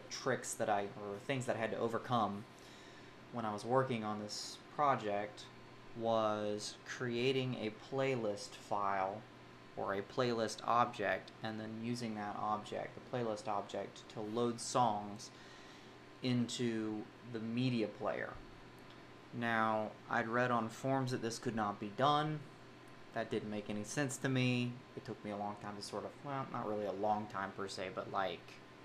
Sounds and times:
Speech: 0.0 - 2.5, 3.3 - 15.4, 16.2 - 18.4, 19.4 - 22.5, 23.2 - 28.6.

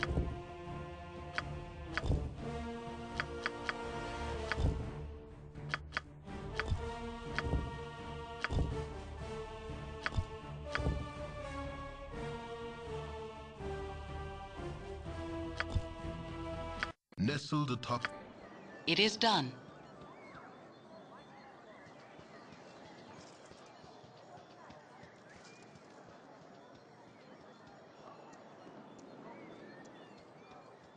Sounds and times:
Music: 0.0 - 18.8
Speech: 17.2 - 18.1, 18.9 - 19.6.

